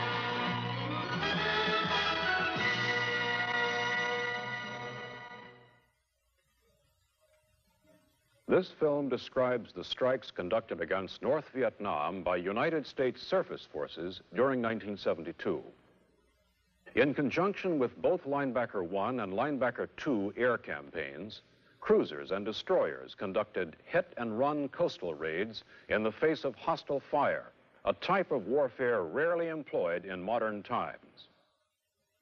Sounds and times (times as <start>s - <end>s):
Music: 0.0s - 8.8s
Speech: 8.5s - 15.8s, 16.9s - 31.4s.